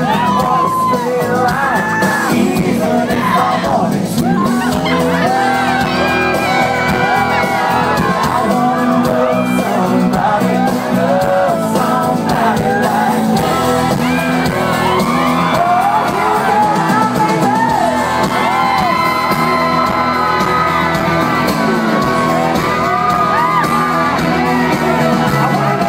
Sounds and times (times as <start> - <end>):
Shout: 0.0 - 2.4, 3.0 - 11.7, 12.5 - 25.8
Music: 0.0 - 25.8
Singing: 0.0 - 25.8.